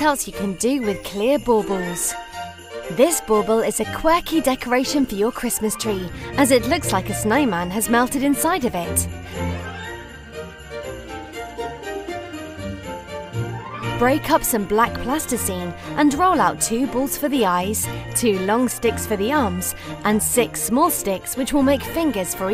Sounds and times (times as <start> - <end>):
Speech: 0.0 - 2.2, 2.9 - 9.1, 14.0 - 22.5
Music: 0.0 - 22.5.